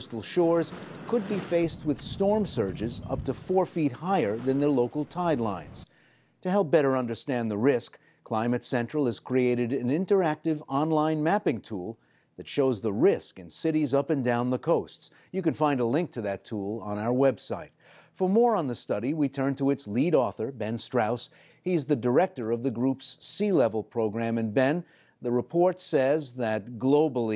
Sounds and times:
Speech: 0.0 - 27.3.

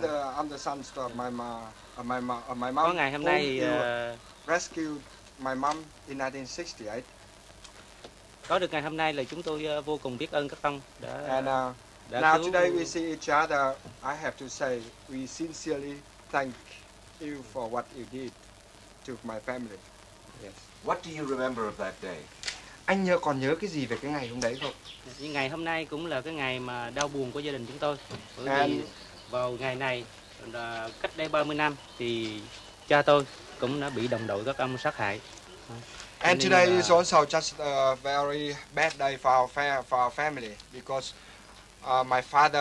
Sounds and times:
Speech: 0.0 - 7.1, 8.5 - 18.3, 19.1 - 19.8, 20.4 - 22.3, 22.9 - 41.2, 41.8 - 42.6.

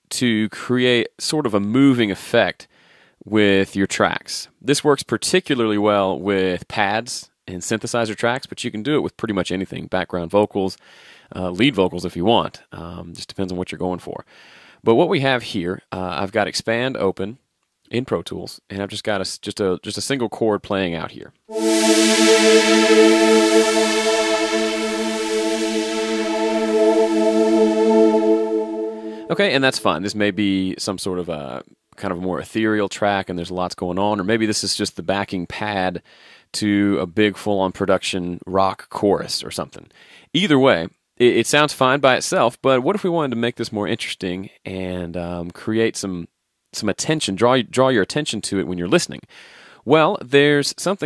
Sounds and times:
Music: 21.5 - 30.0.

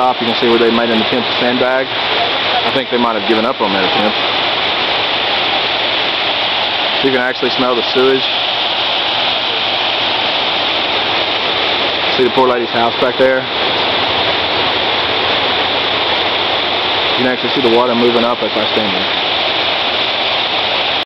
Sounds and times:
Speech: 0.0 - 4.2, 7.0 - 8.3, 12.1 - 13.5, 17.2 - 19.1.

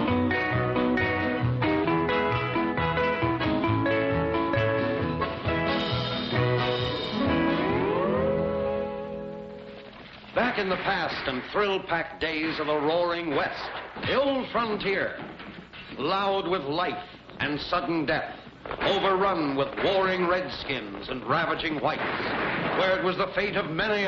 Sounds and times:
Swing music: 0.0 - 15.2
Speech: 10.4 - 15.2, 16.0 - 22.1, 22.8 - 24.0.

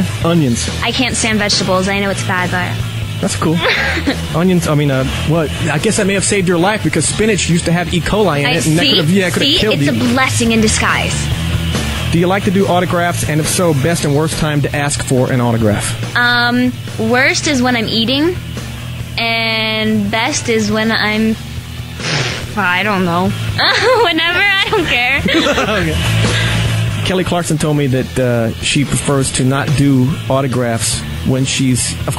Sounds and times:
Speech: 0.0 - 3.8, 4.4 - 11.2, 12.1 - 18.4, 19.2 - 21.4, 27.0 - 32.1
Radio: 8.5 - 10.3.

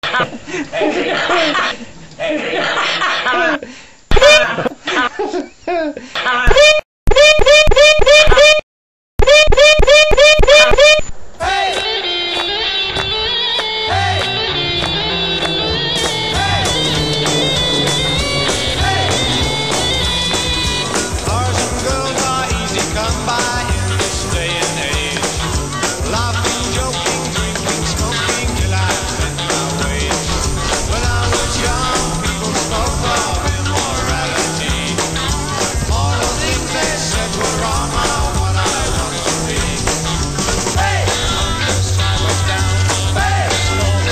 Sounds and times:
Rock and roll: 11.5 - 44.1.

